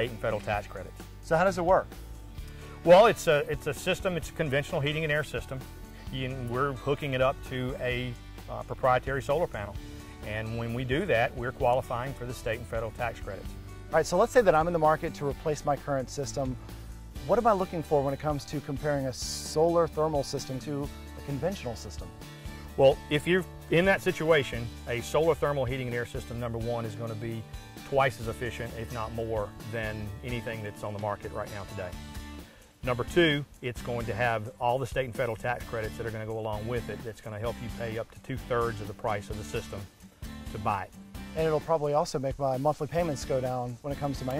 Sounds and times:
Speech: 0.0s - 1.9s, 2.8s - 16.6s, 17.2s - 22.1s, 22.8s - 32.0s, 32.8s - 39.9s, 40.5s - 44.3s
Music: 0.0s - 44.3s.

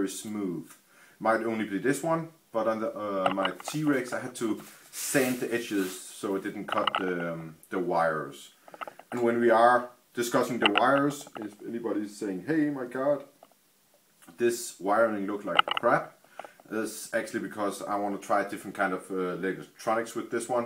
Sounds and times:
Speech: 0.0s - 13.3s, 14.3s - 20.6s.

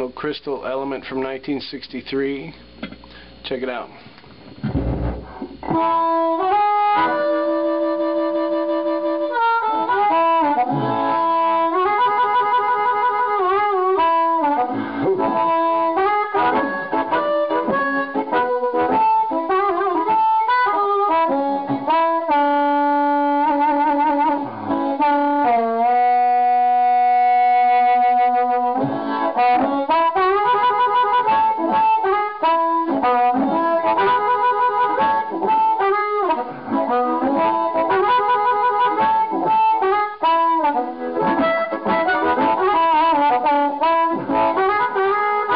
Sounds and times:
Wind instrument, woodwind instrument: 5.6s - 45.5s.

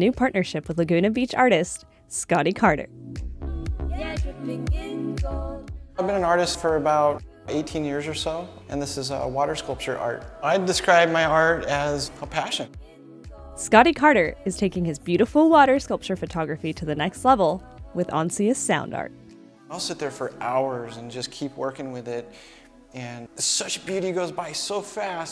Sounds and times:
Speech: 0.0s - 2.9s, 6.0s - 12.7s, 13.6s - 19.1s, 23.0s - 25.3s
Music: 0.0s - 25.3s.

